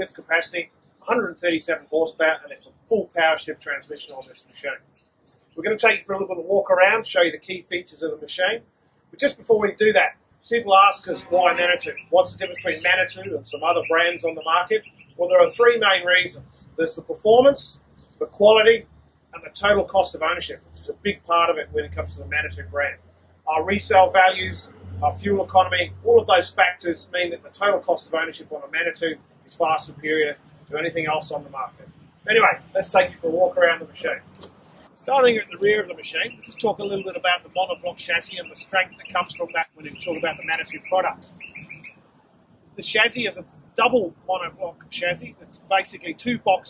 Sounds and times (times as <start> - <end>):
Speech: 0.0 - 8.6, 9.2 - 18.8, 19.4 - 34.3, 35.0 - 41.3, 42.8 - 46.7.